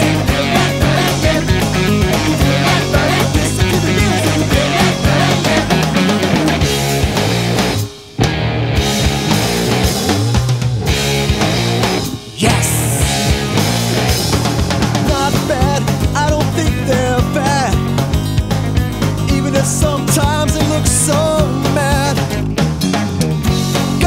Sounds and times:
Music: 0.0s - 24.0s.

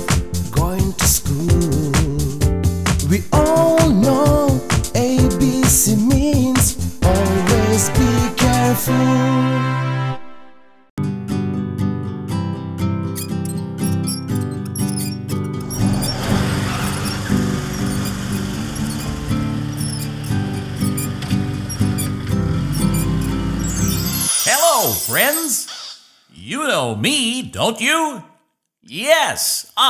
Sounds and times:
Music: 0.0s - 25.4s
Speech: 24.4s - 25.7s, 26.4s - 29.9s.

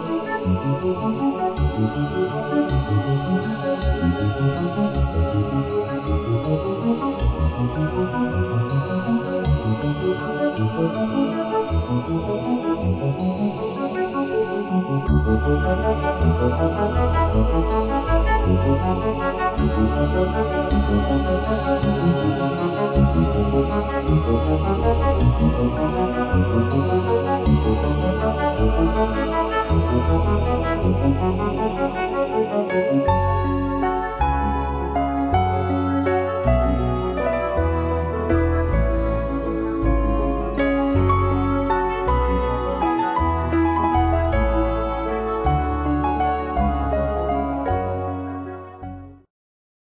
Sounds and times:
Background music: 0.0s - 49.3s.

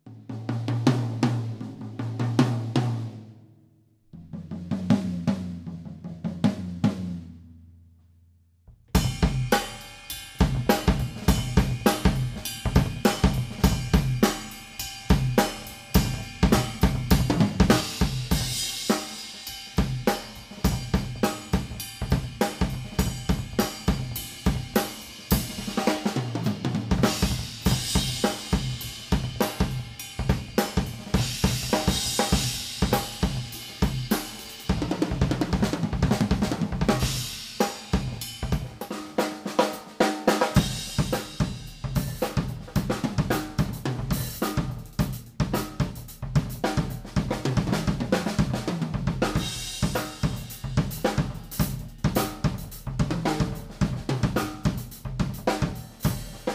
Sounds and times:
Drum kit: 0.0s - 3.3s, 4.2s - 7.5s, 8.7s - 56.5s
Drum roll: 0.3s - 3.2s, 4.2s - 7.4s, 8.9s - 56.5s
Bass drum: 8.7s - 9.8s, 10.4s - 18.9s, 19.8s - 37.4s, 38.0s - 38.9s, 40.6s - 56.5s.

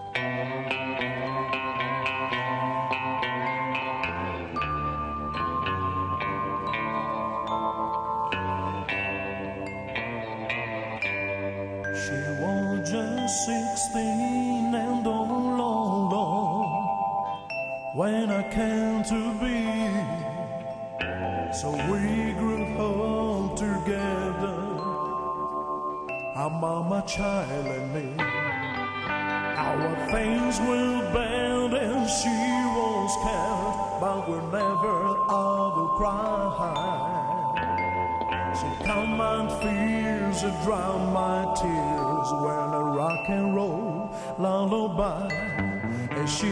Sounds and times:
Music: 0.0s - 46.5s.

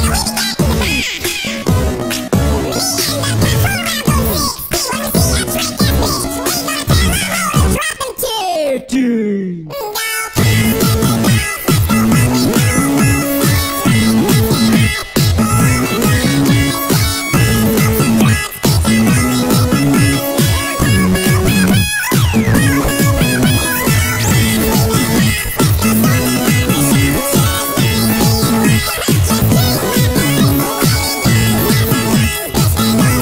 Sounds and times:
Music: 0.0s - 7.8s, 10.3s - 33.2s.

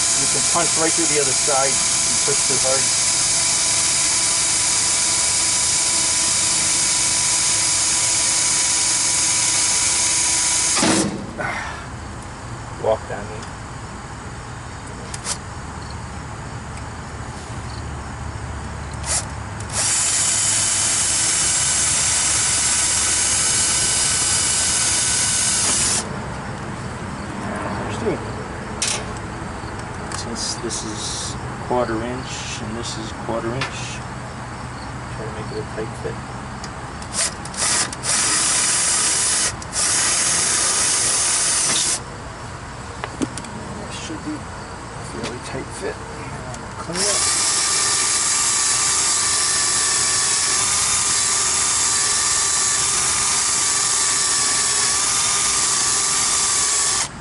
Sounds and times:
Speech: 12.8s - 13.5s, 30.2s - 34.1s, 35.2s - 36.2s, 43.8s - 44.4s, 45.1s - 47.2s.

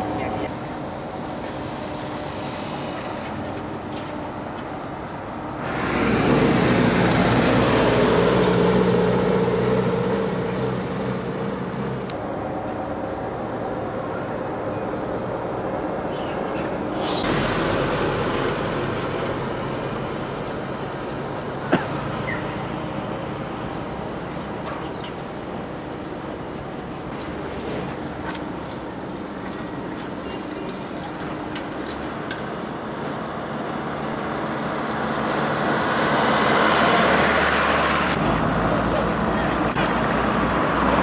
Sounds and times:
Field recording: 0.0s - 41.0s
Outside, urban or manmade: 0.0s - 41.0s
Vehicle: 0.0s - 41.0s.

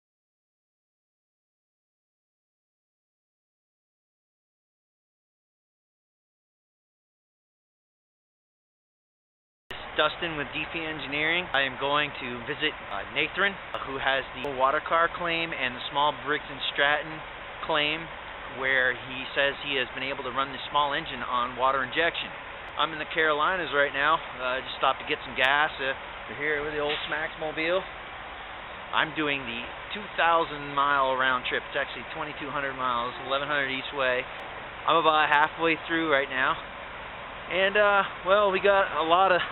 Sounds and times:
Speech: 9.7s - 27.9s, 29.0s - 34.3s, 34.9s - 36.6s, 37.5s - 39.5s.

